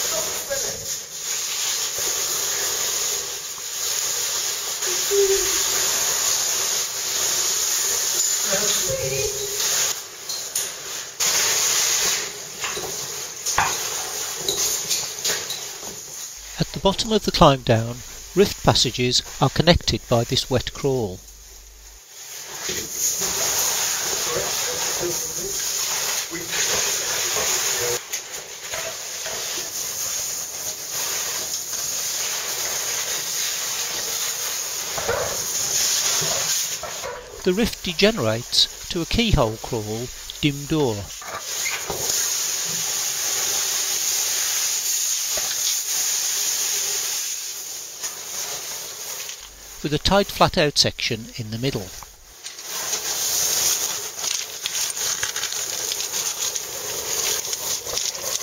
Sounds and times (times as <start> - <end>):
Speech: 0.0 - 0.9, 4.9 - 5.8, 8.5 - 9.6, 16.5 - 21.2, 37.4 - 41.1, 49.8 - 52.0.